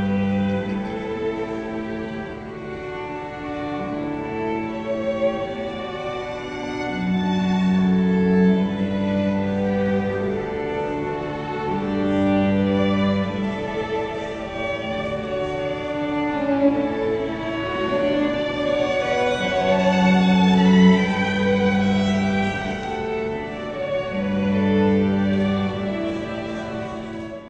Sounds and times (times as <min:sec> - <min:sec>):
Wedding music: 0:00.0 - 0:27.4.